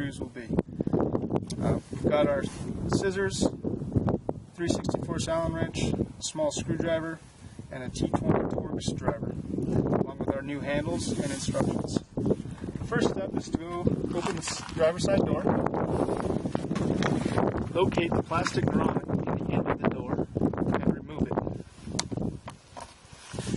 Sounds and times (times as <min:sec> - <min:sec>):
Speech: 0:00.0 - 0:00.6, 0:01.6 - 0:03.6, 0:04.6 - 0:09.3, 0:10.0 - 0:12.0, 0:12.9 - 0:15.5, 0:17.8 - 0:21.4.